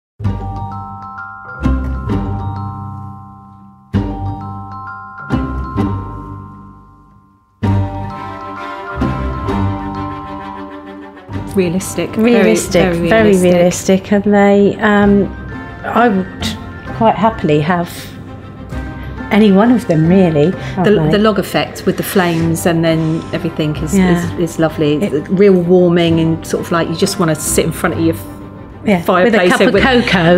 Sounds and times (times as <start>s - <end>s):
Music: 0.2s - 30.3s.